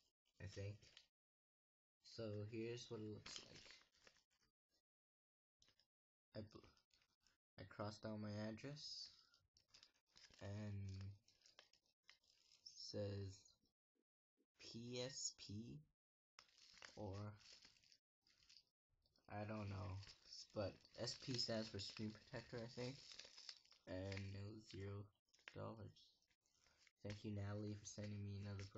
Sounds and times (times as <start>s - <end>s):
Speech: 0.4s - 0.9s, 2.0s - 3.8s, 6.4s - 6.8s, 7.6s - 9.3s, 10.4s - 11.2s, 12.7s - 13.6s, 14.6s - 15.9s, 17.0s - 17.4s, 19.3s - 23.1s, 23.8s - 26.2s, 27.0s - 28.7s.